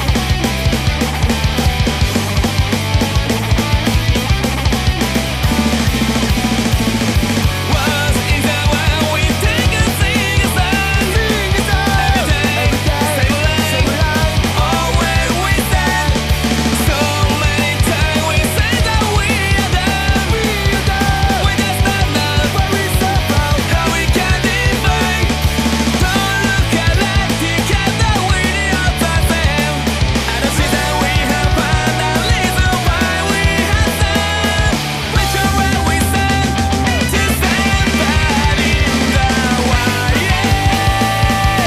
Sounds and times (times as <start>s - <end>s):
Music: 0.0s - 41.6s.